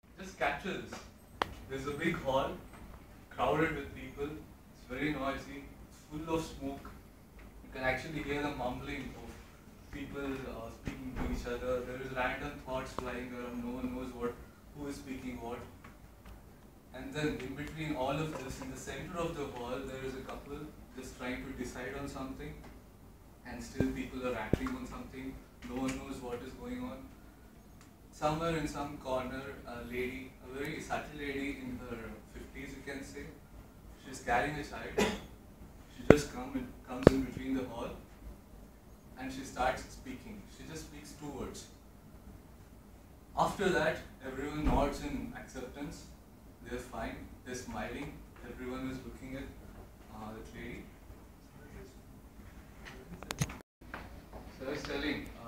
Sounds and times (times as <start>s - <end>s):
Narration, monologue: 0.0s - 55.4s
Male speech, man speaking: 0.2s - 1.1s, 1.7s - 2.6s, 3.3s - 7.0s, 7.7s - 15.8s, 16.9s - 22.6s, 23.4s - 27.1s, 28.2s - 33.4s, 34.0s - 35.2s, 35.9s - 38.0s, 39.2s - 41.8s, 43.4s - 50.9s, 51.5s - 52.0s, 54.5s - 55.4s.